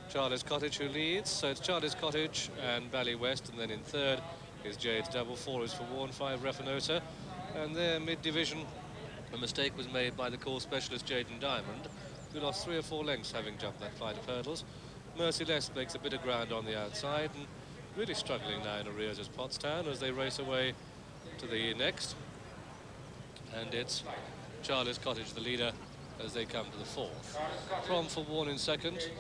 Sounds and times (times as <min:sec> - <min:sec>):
Speech: 0:00.0 - 0:22.3, 0:23.4 - 0:29.2.